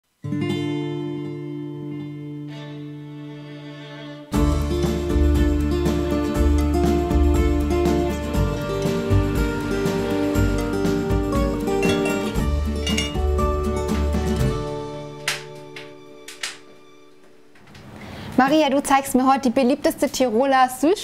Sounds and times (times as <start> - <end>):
Bowed string instrument: 1.9 - 17.6.